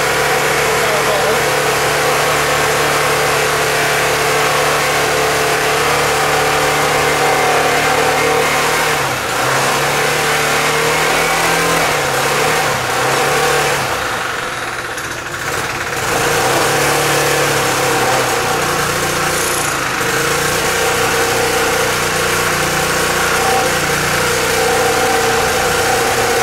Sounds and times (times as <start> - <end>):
Accelerating, revving, vroom: 0.0 - 14.2, 16.0 - 26.4
Medium engine (mid frequency): 0.0 - 26.4.